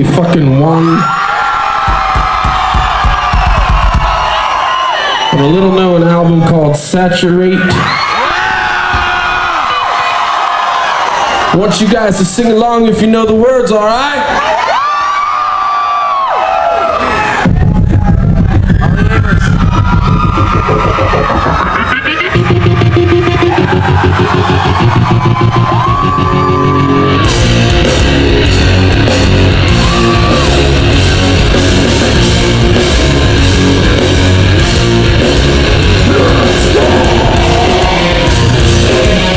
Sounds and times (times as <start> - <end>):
Crowd: 0.0 - 39.3.